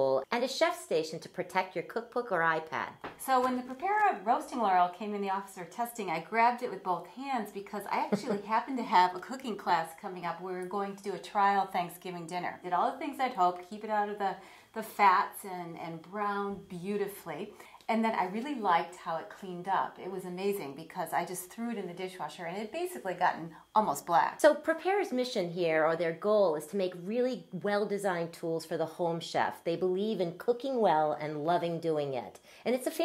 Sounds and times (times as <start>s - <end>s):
Speech: 0.0s - 33.0s.